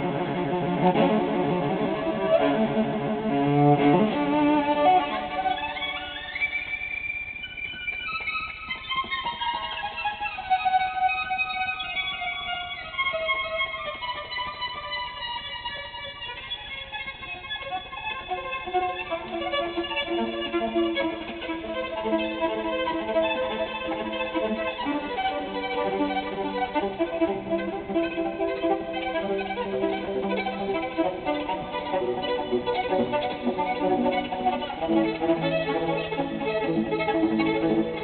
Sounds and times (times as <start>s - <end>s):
Pizzicato: 0.0s - 6.8s, 18.2s - 38.0s
Strum: 0.0s - 10.4s, 18.4s - 38.0s
Cello: 0.0s - 38.0s.